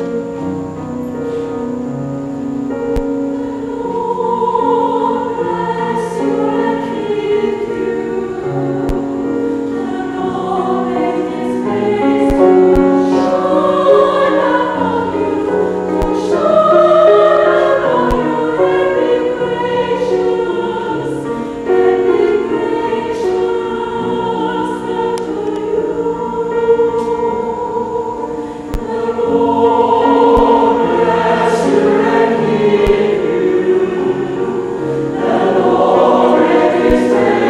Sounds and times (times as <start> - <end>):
Choir: 2.7 - 37.4.